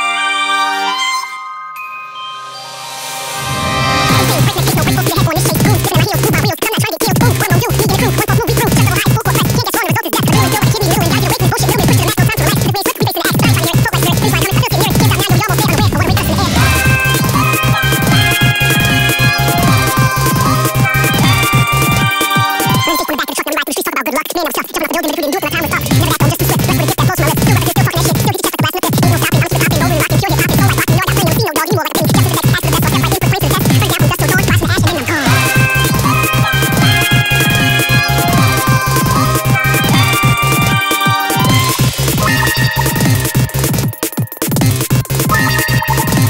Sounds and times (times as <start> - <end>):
Video game music: 0.0 - 6.2, 14.2 - 23.6, 33.8 - 46.2
Pop music: 3.0 - 46.2.